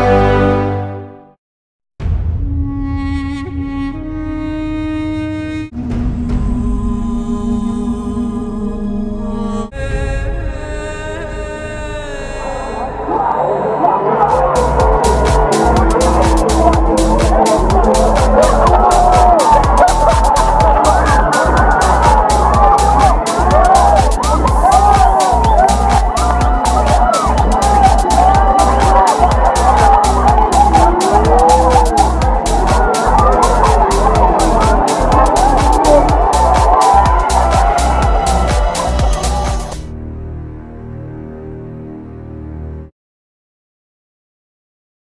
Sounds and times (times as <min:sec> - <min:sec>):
Crowd: 0:12.7 - 0:39.9
Cheering: 0:13.0 - 0:39.8.